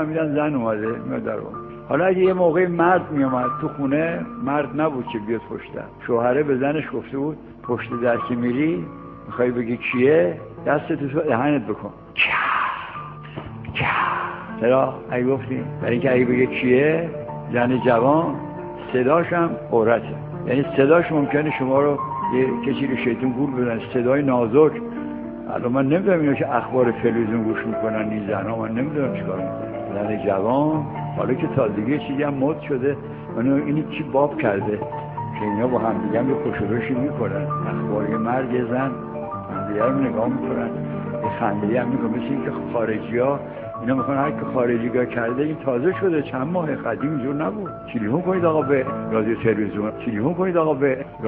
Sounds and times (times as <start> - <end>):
Speech: 0.0 - 13.0, 13.7 - 24.8, 25.5 - 51.2
Music: 0.0 - 51.2.